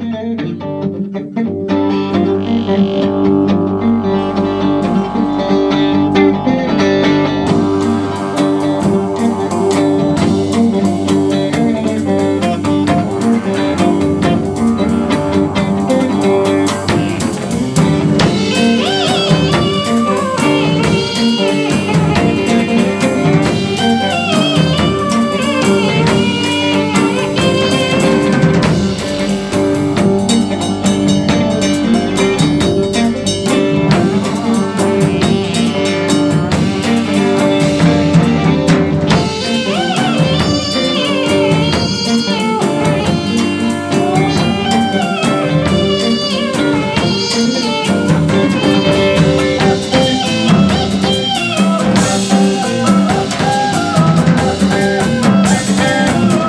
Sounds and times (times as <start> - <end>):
Electric guitar: 0.0 - 56.4.